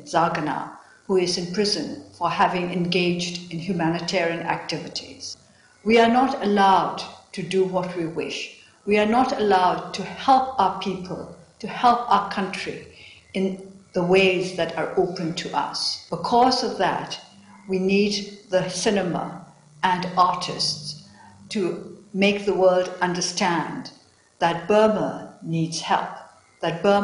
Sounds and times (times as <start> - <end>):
Female speech, woman speaking: 0.0 - 27.0.